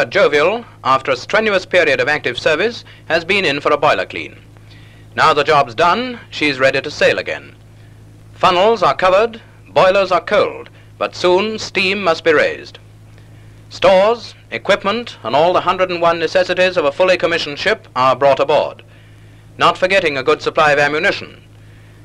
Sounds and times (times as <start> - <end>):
Speech: 0.0 - 4.4, 5.2 - 7.6, 8.4 - 12.8, 13.7 - 18.9, 19.6 - 21.5.